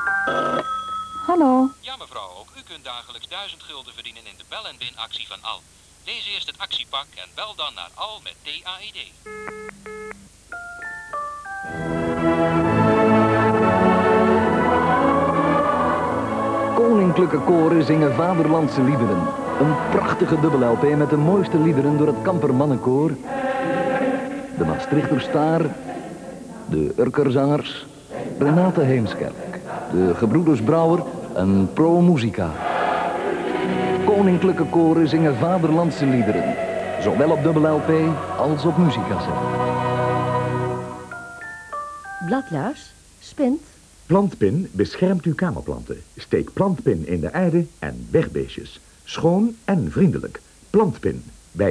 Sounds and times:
Music: 0:00.0 - 0:01.8, 0:09.6 - 0:26.7, 0:32.6 - 0:43.0.

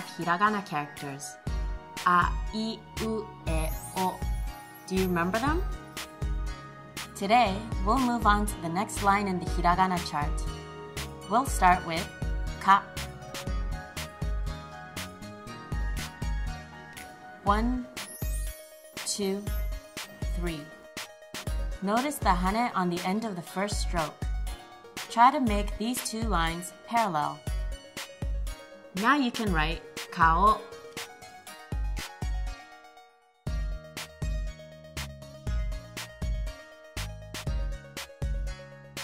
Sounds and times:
Speech: 0:00.0 - 0:01.4, 0:02.0 - 0:04.2, 0:04.9 - 0:05.6, 0:07.2 - 0:10.4, 0:11.3 - 0:12.9, 0:17.4 - 0:17.9, 0:19.1 - 0:19.5, 0:20.4 - 0:20.7, 0:21.8 - 0:24.2, 0:25.1 - 0:27.4, 0:29.0 - 0:30.7
Music: 0:00.0 - 0:39.0.

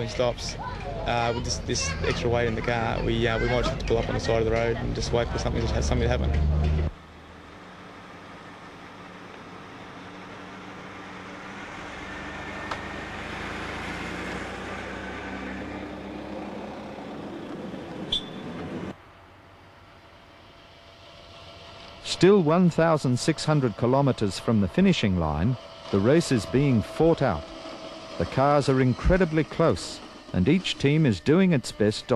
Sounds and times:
Speech: 0:00.0 - 0:06.4, 0:22.1 - 0:27.4, 0:28.2 - 0:32.1
Vehicle: 0:00.0 - 0:32.1.

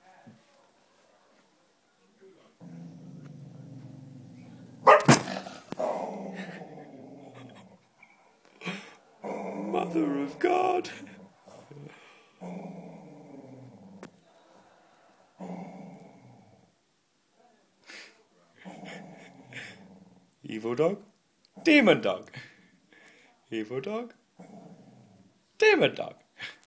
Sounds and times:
Speech: 0:09.6 - 0:11.1, 0:20.4 - 0:22.3, 0:23.2 - 0:24.2, 0:25.6 - 0:26.2.

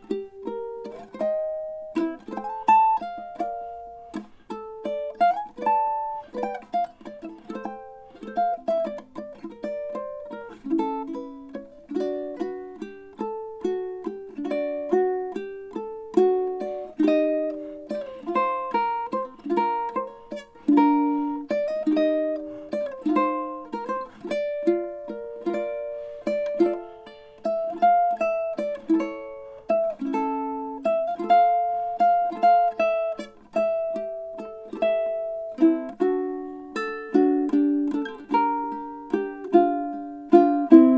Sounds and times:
Ukulele: 0:00.0 - 0:40.9.

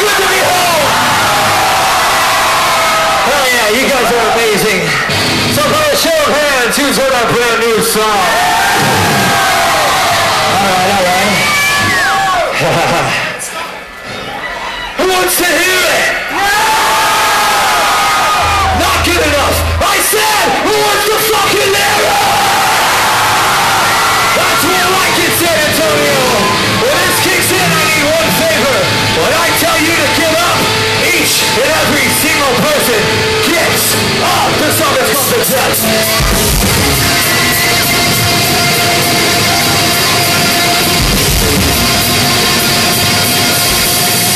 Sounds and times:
Music: 0:00.0 - 0:12.4, 0:16.4 - 0:44.3
Speech: 0:03.3 - 0:05.0, 0:05.6 - 0:08.3, 0:15.0 - 0:16.2, 0:18.8 - 0:22.1, 0:24.4 - 0:35.8.

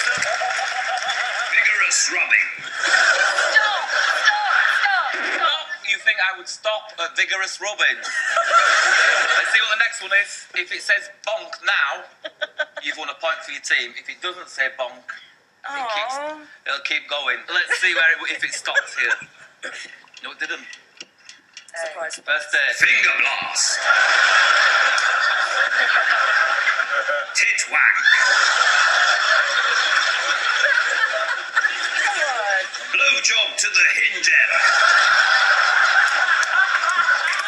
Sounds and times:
Speech: 0:15.7 - 0:19.2, 0:21.8 - 0:23.8.

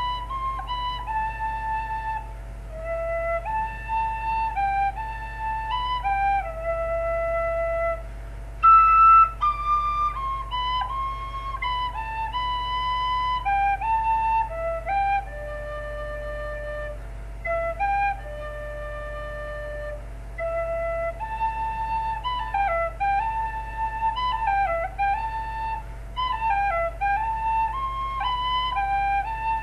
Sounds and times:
Whistle: 0:00.0 - 0:29.6.

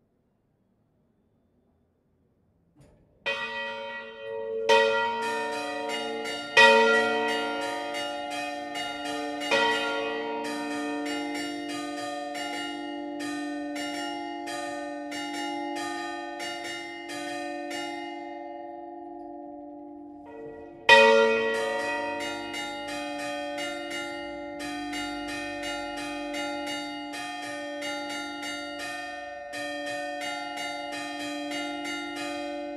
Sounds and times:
Church bell: 0:02.9 - 0:32.7.

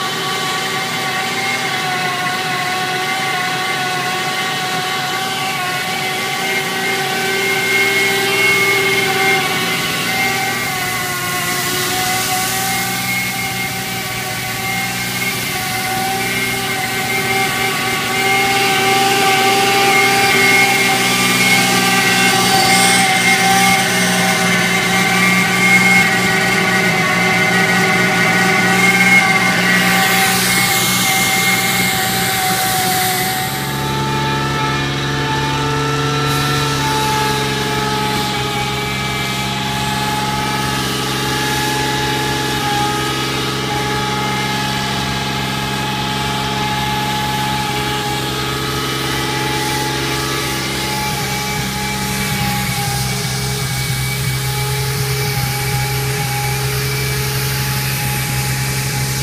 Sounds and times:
Truck: 0:00.0 - 0:59.2.

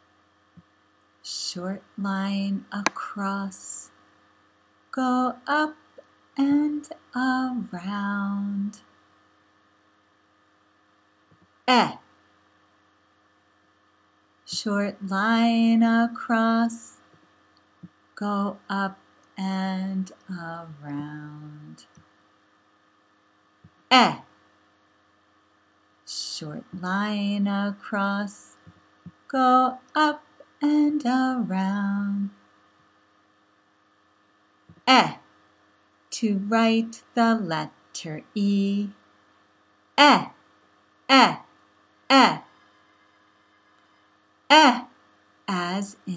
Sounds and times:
Speech: 0:01.3 - 0:03.9, 0:05.0 - 0:05.8, 0:06.4 - 0:08.8, 0:11.7 - 0:12.0, 0:14.5 - 0:17.0, 0:18.2 - 0:21.9, 0:23.9 - 0:24.3, 0:26.1 - 0:28.6, 0:29.3 - 0:32.4, 0:34.8 - 0:35.2, 0:36.2 - 0:39.0, 0:40.0 - 0:40.4, 0:41.1 - 0:41.5, 0:42.1 - 0:42.5, 0:44.5 - 0:44.9, 0:45.5 - 0:46.1.

